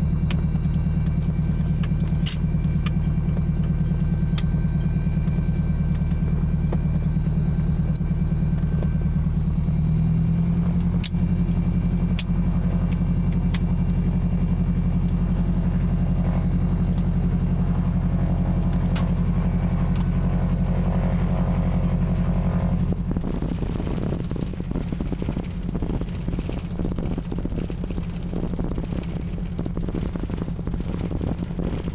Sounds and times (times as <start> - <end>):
Fixed-wing aircraft, airplane: 0.0 - 31.9
Outside, urban or manmade: 0.0 - 31.9.